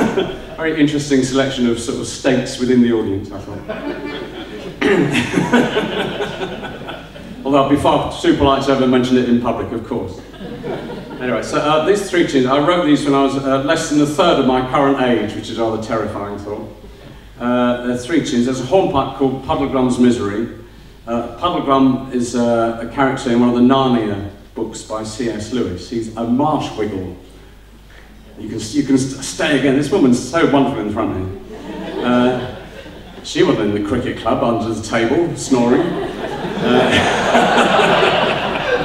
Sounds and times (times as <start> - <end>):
Speech: 0.6 - 3.8, 7.4 - 10.3, 11.2 - 16.8, 17.4 - 27.2, 28.3 - 32.6, 33.2 - 37.3.